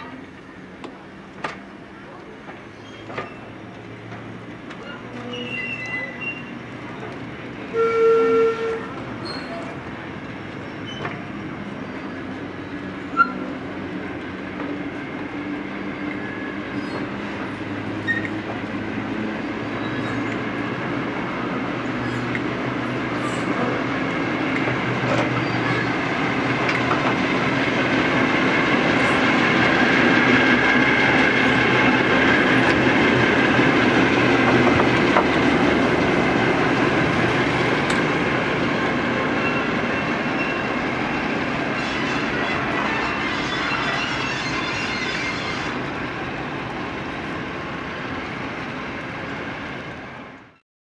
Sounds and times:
Railroad car, train wagon: 0:00.0 - 0:50.6
Train: 0:00.0 - 0:50.6
Clickety-clack: 0:23.5 - 0:25.4, 0:26.5 - 0:27.5, 0:28.7 - 0:36.1, 0:37.1 - 0:38.2.

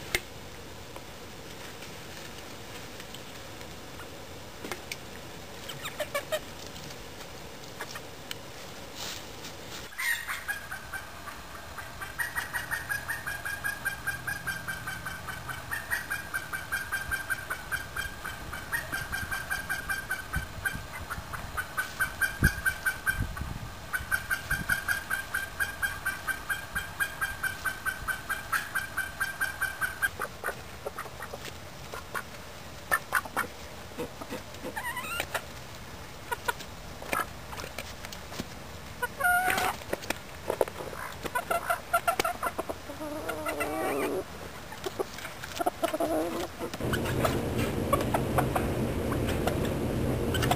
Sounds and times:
Chicken, rooster: 0:05.6 - 0:06.5, 0:09.9 - 0:32.3, 0:32.9 - 0:35.5, 0:36.3 - 0:37.7, 0:39.0 - 0:39.9, 0:40.5 - 0:50.5.

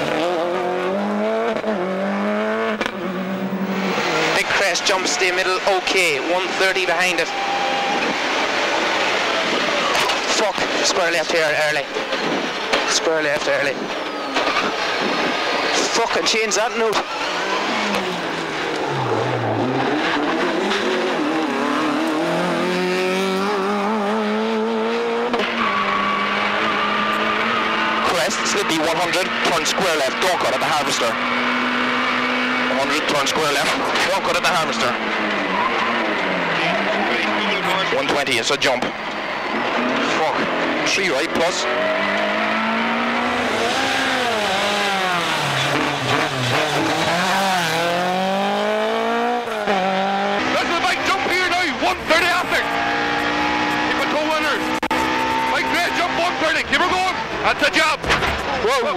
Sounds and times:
Race car, auto racing: 0:00.0 - 0:58.9.

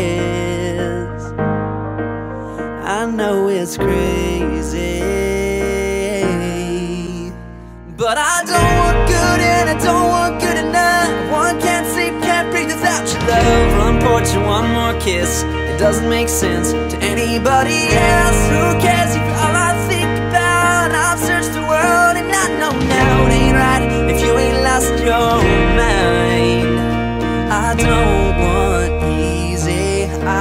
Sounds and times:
Music: 0:00.0 - 0:30.4.

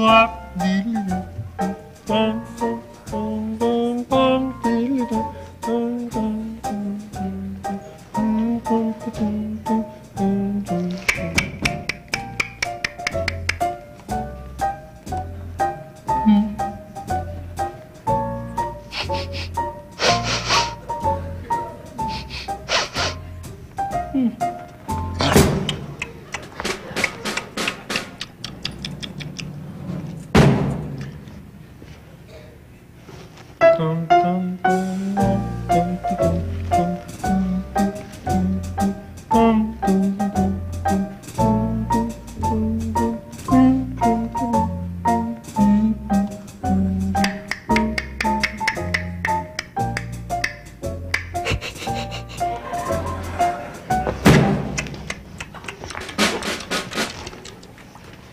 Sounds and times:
Music: 0:00.0 - 0:28.2, 0:33.6 - 0:55.3, 0:56.1 - 0:57.1.

